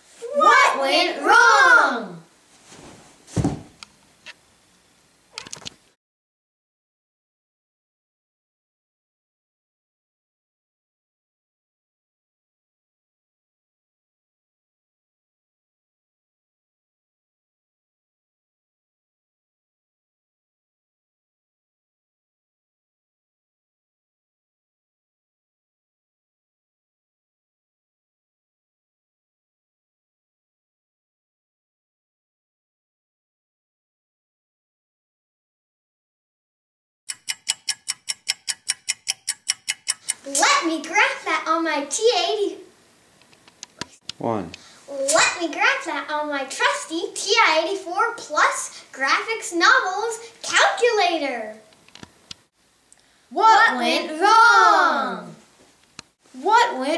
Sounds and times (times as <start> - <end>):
Inside, small room: 0.0 - 6.0, 37.1 - 56.9
Speech: 0.2 - 2.3, 40.3 - 42.7, 44.2 - 51.6, 53.4 - 55.4, 56.4 - 56.9.